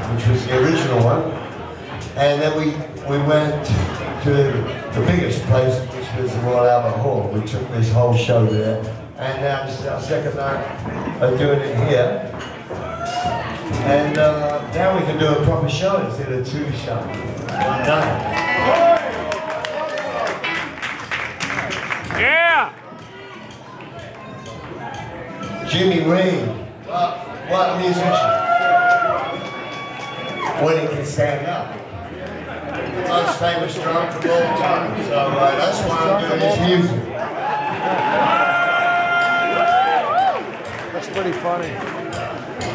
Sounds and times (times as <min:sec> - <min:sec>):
Speech: 0:00.0 - 0:01.4, 0:02.0 - 0:12.3, 0:13.7 - 0:17.2
Music: 0:00.0 - 0:42.7.